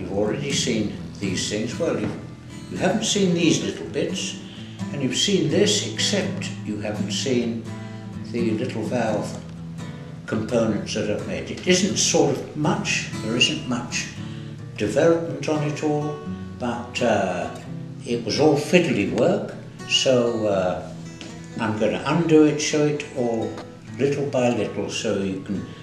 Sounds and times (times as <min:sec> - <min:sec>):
Speech: 0:00.0 - 0:07.7, 0:08.3 - 0:09.4, 0:10.3 - 0:14.2, 0:14.8 - 0:20.9, 0:21.6 - 0:25.7
Music: 0:00.0 - 0:25.8.